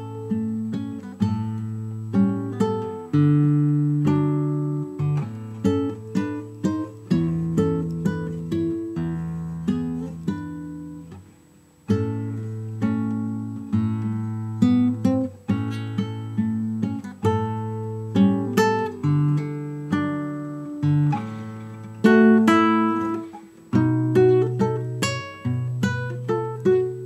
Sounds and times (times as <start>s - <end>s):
Acoustic guitar: 0.0s - 27.0s.